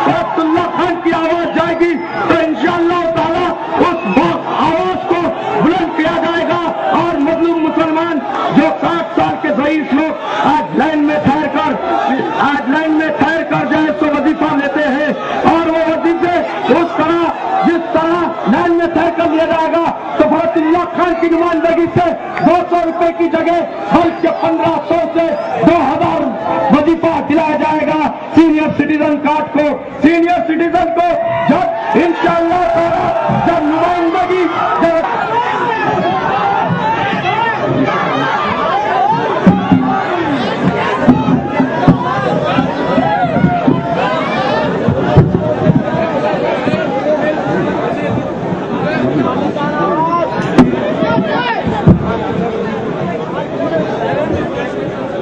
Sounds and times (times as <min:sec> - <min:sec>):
Narration, monologue: 0:00.0 - 0:36.0
Male speech, man speaking: 0:00.0 - 0:36.4, 0:48.8 - 0:51.7.